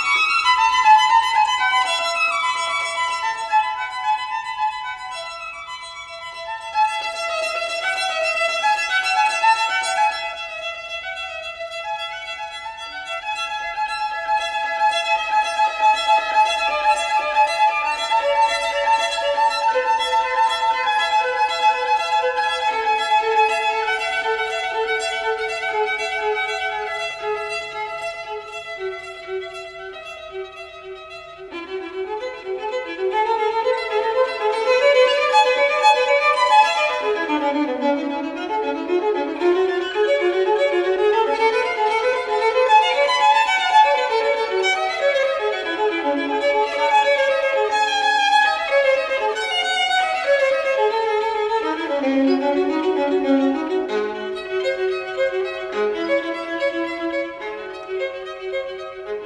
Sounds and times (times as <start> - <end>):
Violin, fiddle: 0.0 - 59.2.